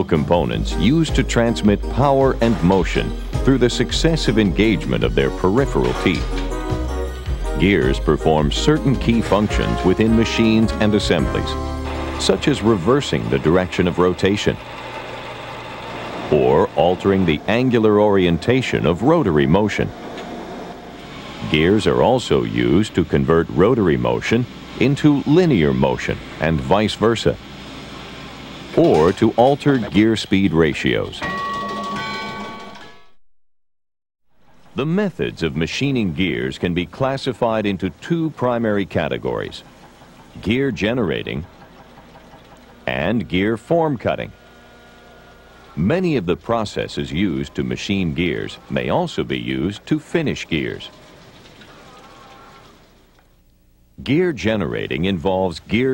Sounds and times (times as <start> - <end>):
Speech: 0.0 - 6.4, 7.6 - 11.6, 12.2 - 14.6, 16.3 - 19.9, 21.4 - 27.4, 28.7 - 31.2, 34.8 - 39.7, 40.4 - 41.5, 42.9 - 44.4, 45.8 - 51.0, 54.0 - 55.9.